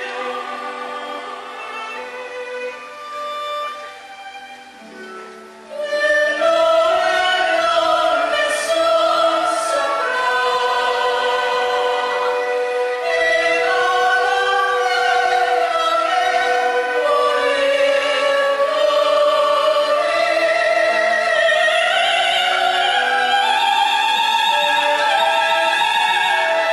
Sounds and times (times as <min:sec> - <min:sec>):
Singing: 0:00.0 - 0:02.0, 0:05.7 - 0:26.7
Opera: 0:00.0 - 0:26.7.